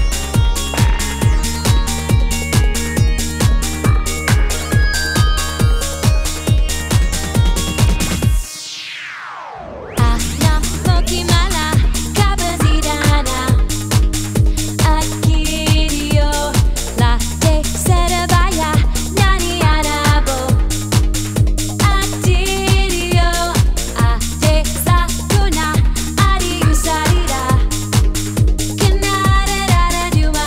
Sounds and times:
Music: 0.0 - 30.4.

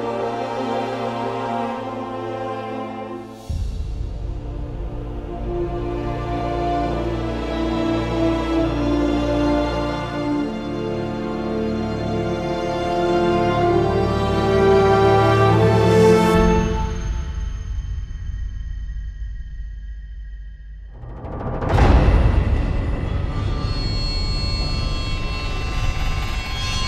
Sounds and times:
Music: 0.0 - 26.8.

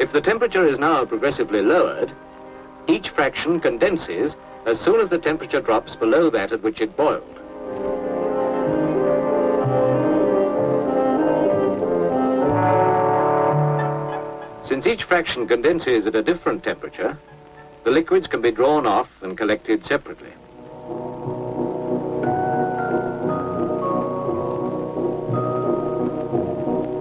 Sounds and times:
Speech: 0.0 - 2.2, 2.9 - 7.3, 14.7 - 17.2, 17.8 - 20.4
Music: 0.0 - 27.0.

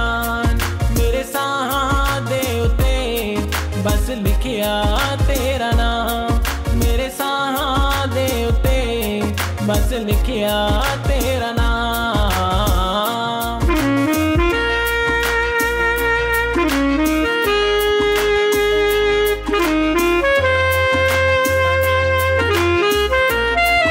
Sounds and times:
Saxophone: 0.0 - 23.9.

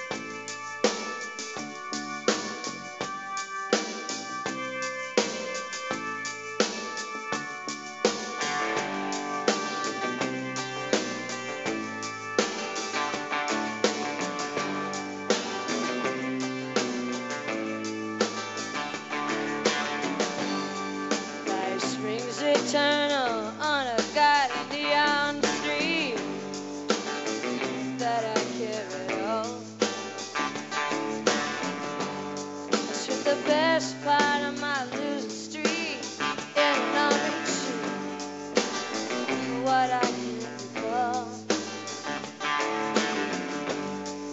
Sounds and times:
Music: 0.0 - 44.3.

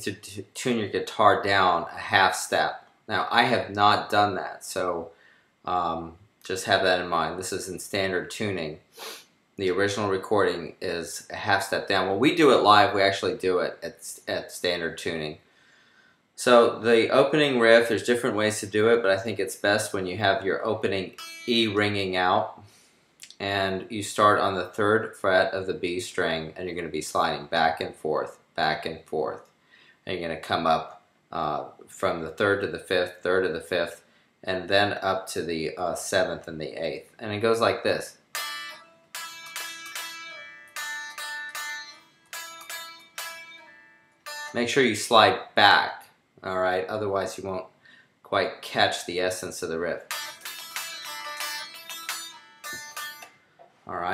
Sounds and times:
Speech: 0.0 - 5.1, 5.7 - 8.8, 9.6 - 15.4, 16.4 - 22.6, 23.2 - 29.4, 30.1 - 38.2, 44.6 - 47.7, 48.3 - 50.1, 53.9 - 54.1
Guitar: 16.4 - 22.6, 37.4 - 46.1, 49.4 - 54.1.

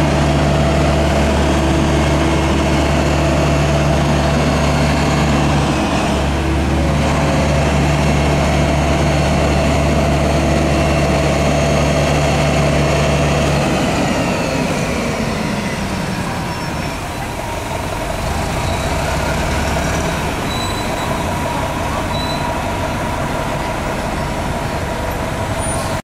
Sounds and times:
Vehicle: 0.0 - 26.0
Accelerating, revving, vroom: 18.4 - 20.2.

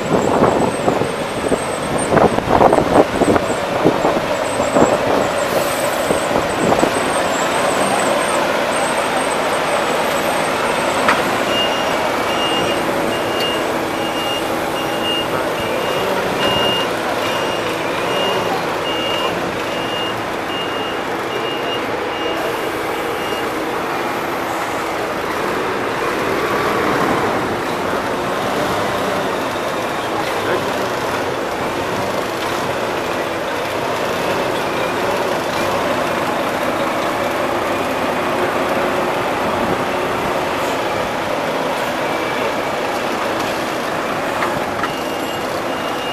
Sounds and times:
Vehicle: 0.0 - 46.1.

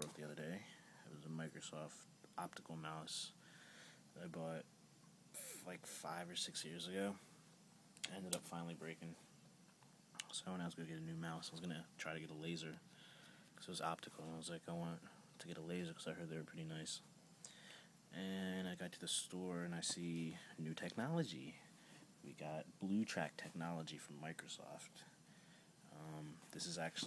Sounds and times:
Speech: 0.0 - 3.4, 4.2 - 4.7, 5.4 - 7.3, 8.0 - 9.2, 10.2 - 12.8, 13.6 - 17.1, 18.1 - 25.1, 25.9 - 27.0.

